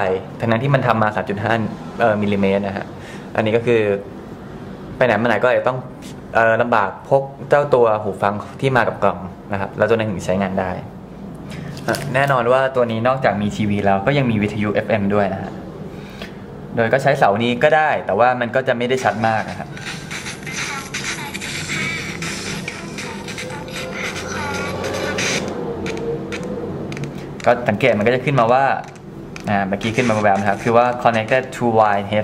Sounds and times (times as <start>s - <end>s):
Speech: 0.0s - 4.0s, 5.0s - 10.9s, 11.9s - 15.6s, 16.8s - 19.7s, 27.5s - 28.8s, 29.5s - 32.2s
Music: 19.8s - 25.5s.